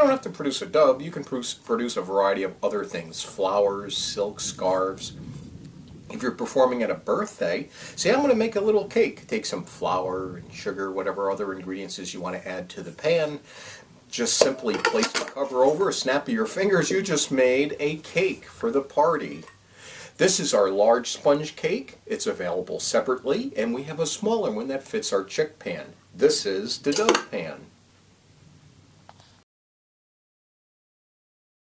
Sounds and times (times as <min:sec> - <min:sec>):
Speech: 0:00.0 - 0:05.1, 0:06.1 - 0:13.5, 0:14.1 - 0:19.5, 0:20.2 - 0:27.7.